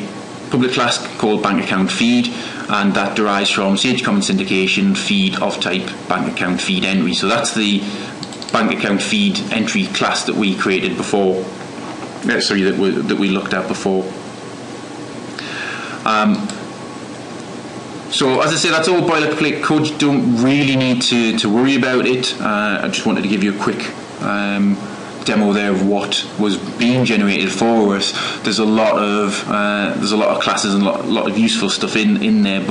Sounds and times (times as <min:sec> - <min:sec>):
Narration, monologue: 0:00.0 - 0:32.7.